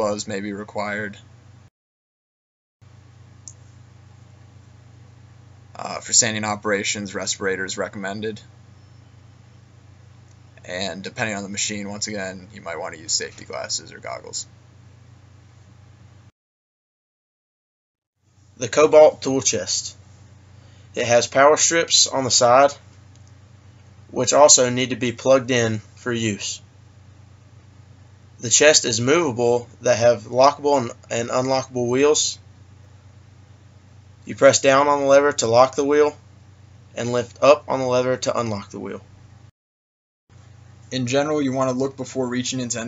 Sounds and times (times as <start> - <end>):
Speech: 0.0 - 1.3, 5.8 - 8.5, 10.6 - 14.5, 18.6 - 20.0, 21.0 - 22.8, 24.1 - 26.7, 28.4 - 32.4, 34.2 - 36.2, 37.0 - 39.1, 40.9 - 42.8.